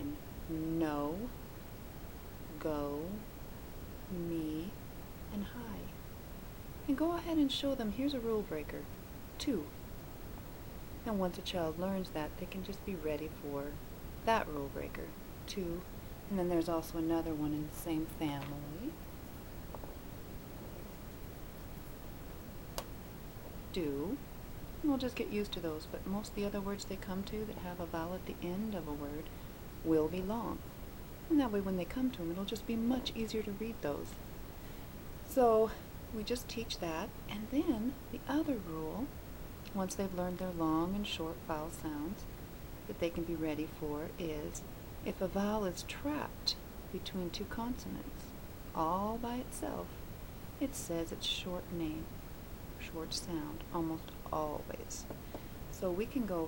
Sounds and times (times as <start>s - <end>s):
Speech: 0.0s - 1.4s, 2.5s - 3.3s, 4.1s - 5.9s, 6.9s - 9.7s, 11.0s - 19.0s, 23.7s - 24.2s, 24.8s - 30.6s, 31.3s - 34.2s, 35.3s - 39.1s, 39.7s - 42.3s, 42.9s - 49.9s, 50.6s - 52.1s, 52.8s - 55.1s, 55.7s - 56.4s.